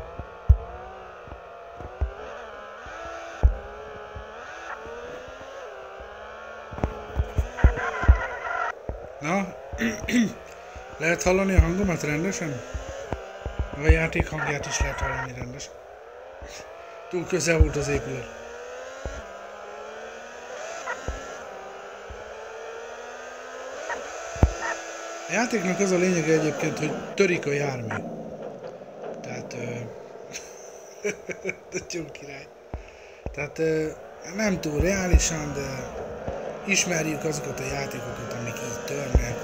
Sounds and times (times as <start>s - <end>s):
Car: 0.0s - 39.4s
Speech: 9.2s - 10.4s, 11.0s - 12.7s, 13.7s - 15.7s, 16.5s - 18.4s, 25.3s - 28.0s, 29.2s - 30.0s, 31.3s - 32.5s, 33.3s - 36.0s, 36.6s - 39.4s.